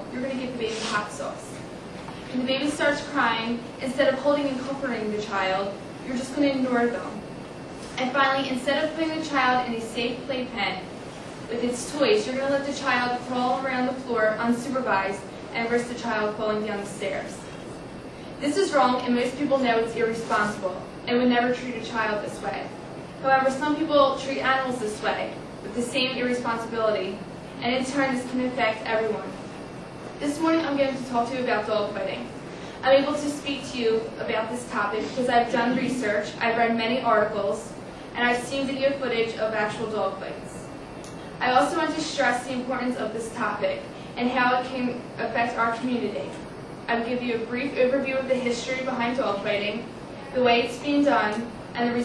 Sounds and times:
Female speech, woman speaking: 0:00.0 - 0:01.6, 0:02.3 - 0:07.3, 0:08.0 - 0:10.9, 0:11.5 - 0:17.5, 0:18.4 - 0:29.4, 0:30.2 - 0:40.7, 0:41.4 - 0:52.0
Narration, monologue: 0:00.0 - 0:52.0.

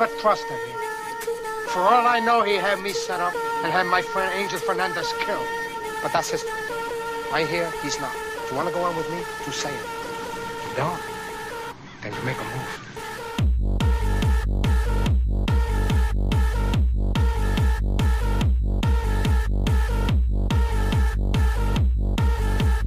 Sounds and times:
Music: 0:00.0 - 0:22.8.

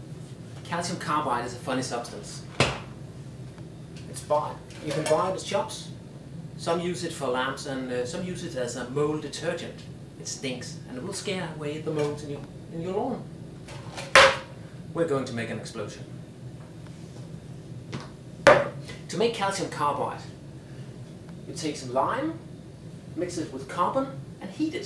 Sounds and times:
Speech: 0:00.6 - 0:02.5, 0:04.1 - 0:06.0, 0:06.6 - 0:13.3, 0:15.0 - 0:16.1, 0:19.1 - 0:20.4, 0:21.5 - 0:22.5, 0:23.2 - 0:24.8.

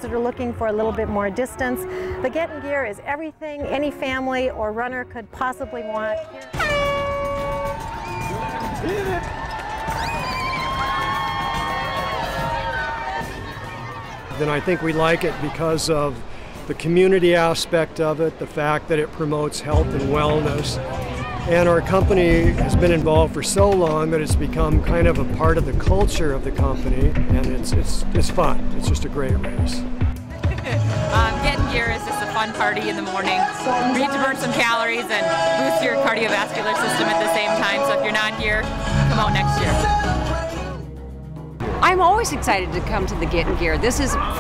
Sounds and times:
Crowd: 0:05.6 - 0:18.4, 0:19.7 - 0:27.4, 0:29.6 - 0:40.9, 0:41.6 - 0:44.4
Cheering: 0:06.4 - 0:15.6, 0:43.7 - 0:44.4
Children shouting: 0:07.7 - 0:15.4, 0:44.1 - 0:44.4.

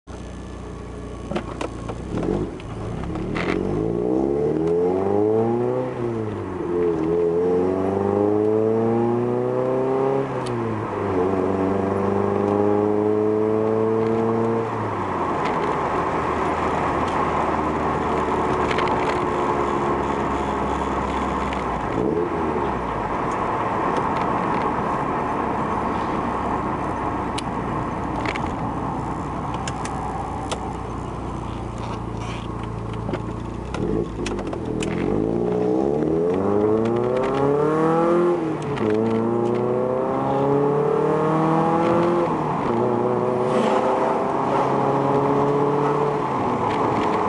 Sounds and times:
Car: 0:00.0 - 0:47.2.

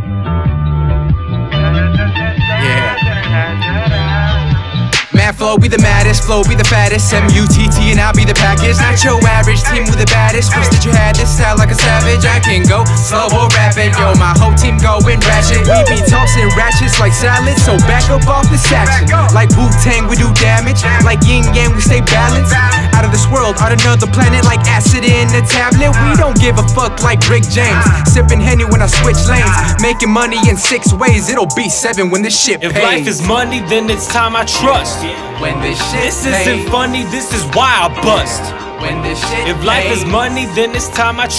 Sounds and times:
Music: 0:00.0 - 0:41.3.

